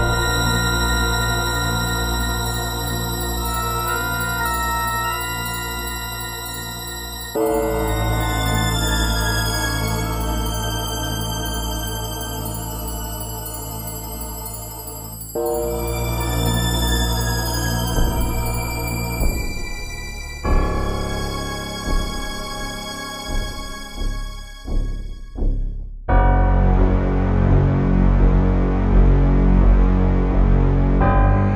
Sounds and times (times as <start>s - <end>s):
Music: 0.0s - 31.5s.